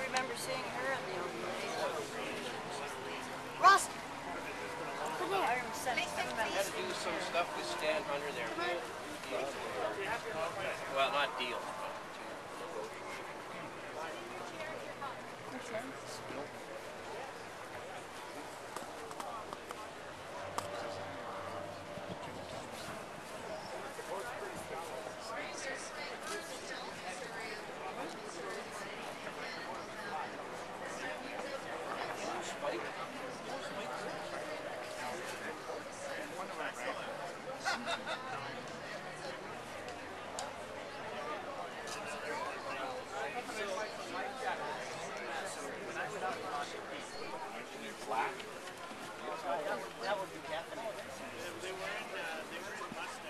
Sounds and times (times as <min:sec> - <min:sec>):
Speech: 0:00.0 - 0:53.3.